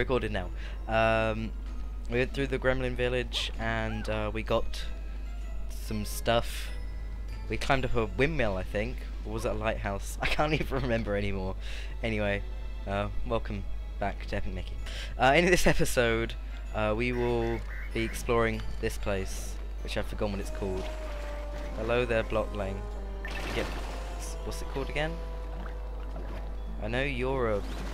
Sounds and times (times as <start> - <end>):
Speech: 0.0 - 1.5, 2.1 - 4.9, 5.7 - 6.8, 7.5 - 20.9, 21.8 - 22.8, 23.5 - 25.2, 26.8 - 27.6
Music: 0.0 - 27.9.